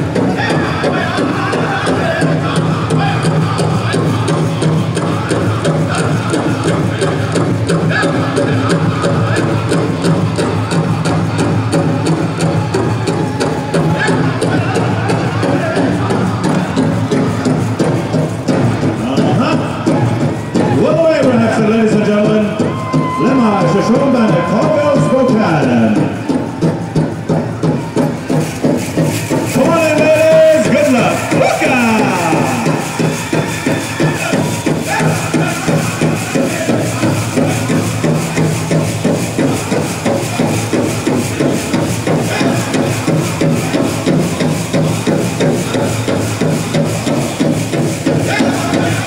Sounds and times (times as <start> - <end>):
Music: 0.0 - 49.0
Speech: 19.0 - 19.9, 20.6 - 26.3, 29.5 - 33.0.